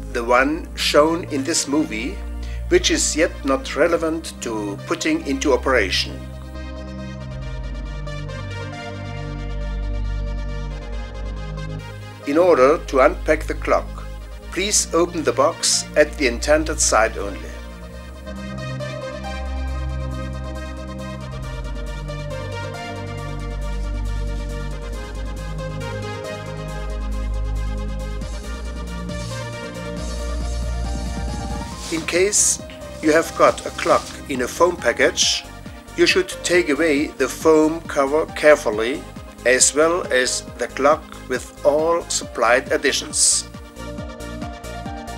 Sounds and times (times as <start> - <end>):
Music: 0.0 - 45.1.